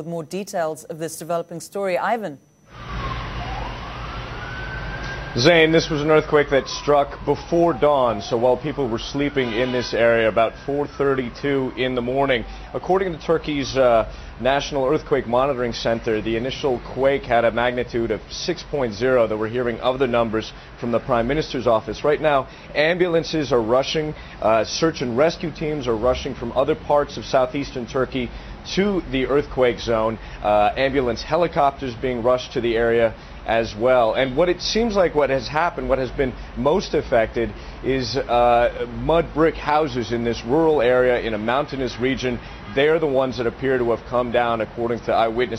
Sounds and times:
Speech: 0.0 - 2.4, 5.4 - 45.5.

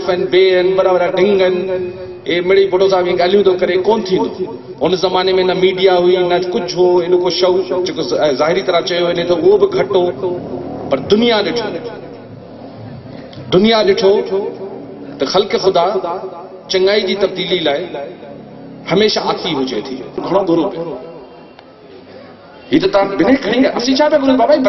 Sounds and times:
Male speech, man speaking: 0.0 - 12.0, 13.5 - 14.6, 15.2 - 18.2, 18.9 - 21.0, 22.6 - 24.6.

